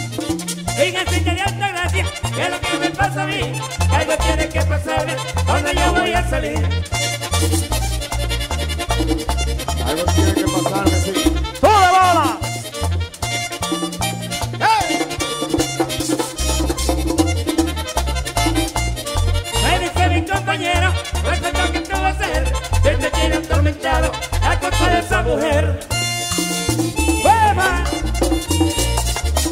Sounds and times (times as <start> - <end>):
Background music: 0.1 - 15.3, 17.8 - 29.5
Rhythm and blues: 3.8 - 29.5.